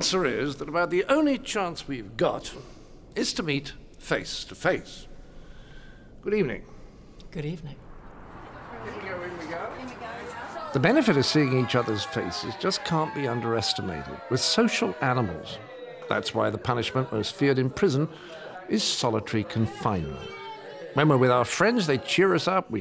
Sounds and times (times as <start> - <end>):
Speech: 8.8 - 20.3.